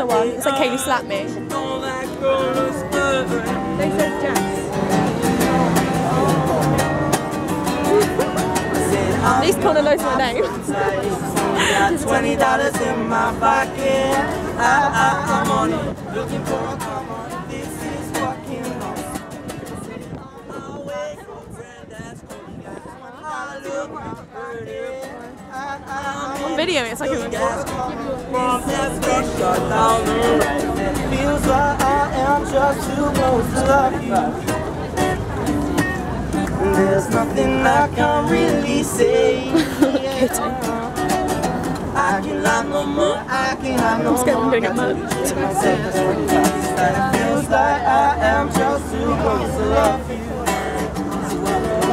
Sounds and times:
Singing: 0.0 - 7.2, 7.8 - 35.3, 36.3 - 51.9
Plucked string instrument: 0.0 - 51.9.

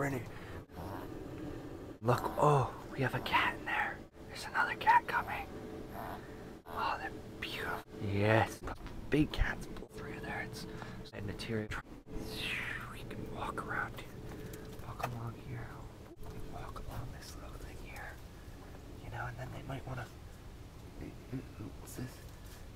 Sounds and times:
Speech: 0.0 - 0.3, 2.0 - 3.7, 7.0 - 14.1, 21.0 - 22.2.

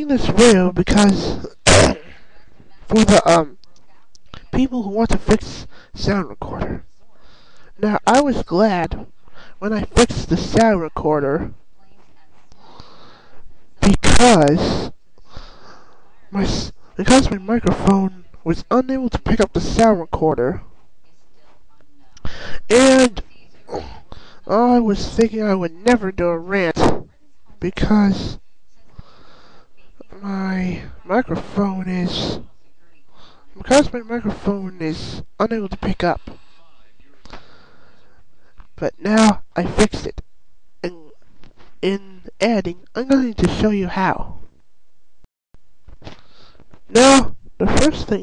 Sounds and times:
Speech: 0.0 - 14.9, 15.7 - 37.6, 38.5 - 40.2, 40.8 - 41.2, 41.8 - 44.4, 46.9 - 48.2.

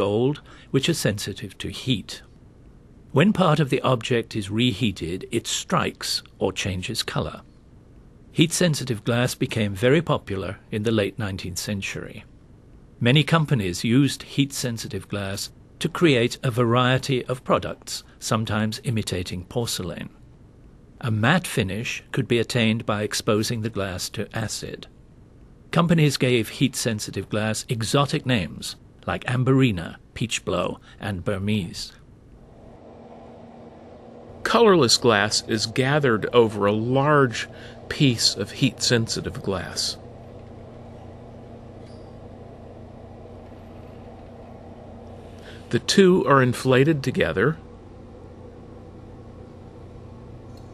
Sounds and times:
Speech: 0.0 - 2.3, 3.1 - 7.5, 8.4 - 12.3, 13.0 - 20.2, 21.0 - 24.9, 25.7 - 32.0, 34.4 - 40.0, 45.7 - 47.6.

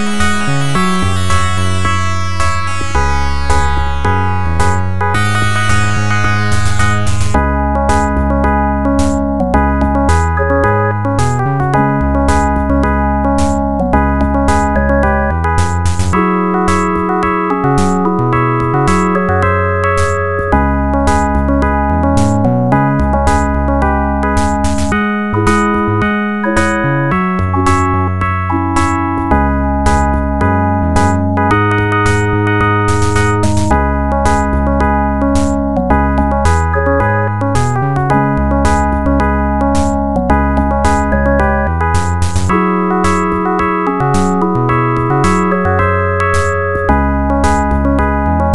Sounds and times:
Soundtrack music: 0.0 - 48.5.

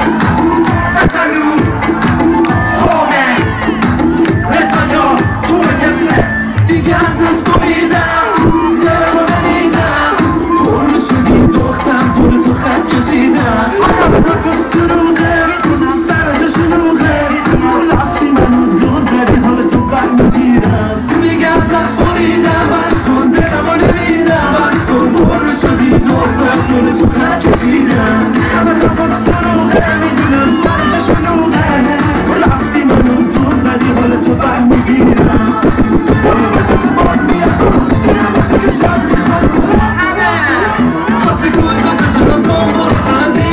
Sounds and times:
Music: 0.0 - 43.5.

